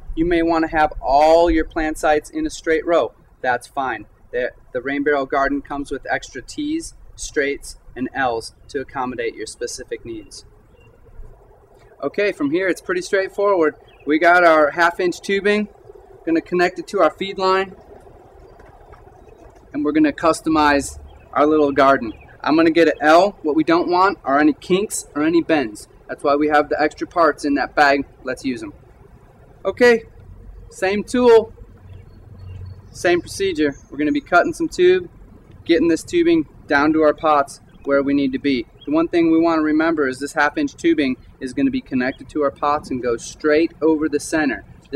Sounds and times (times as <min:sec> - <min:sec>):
Speech: 0:00.2 - 0:10.4, 0:12.0 - 0:15.7, 0:16.3 - 0:17.8, 0:19.8 - 0:28.8, 0:29.7 - 0:30.1, 0:30.7 - 0:31.5, 0:32.9 - 0:35.1, 0:35.7 - 0:44.9.